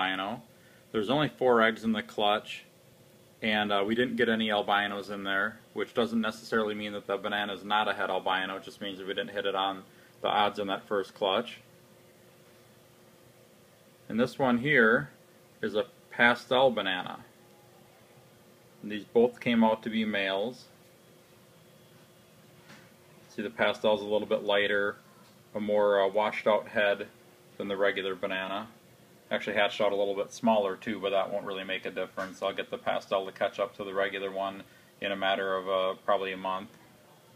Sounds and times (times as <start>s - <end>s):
Speech: 0.0s - 2.7s, 3.4s - 11.7s, 14.1s - 17.3s, 18.8s - 20.8s, 23.3s - 37.3s.